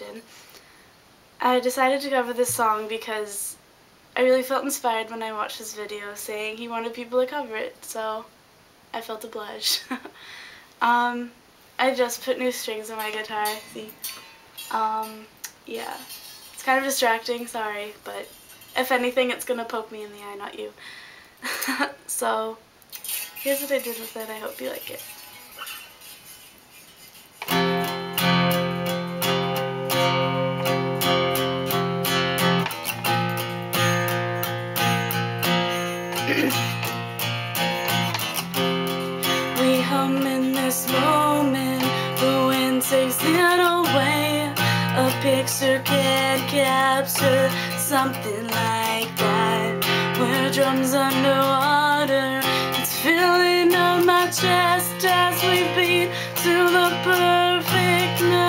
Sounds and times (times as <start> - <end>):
Speech: 1.4 - 3.6, 4.2 - 8.3, 9.0 - 10.0, 10.8 - 14.0, 14.7 - 20.8, 22.1 - 22.6, 23.5 - 25.1
Music: 27.4 - 58.4.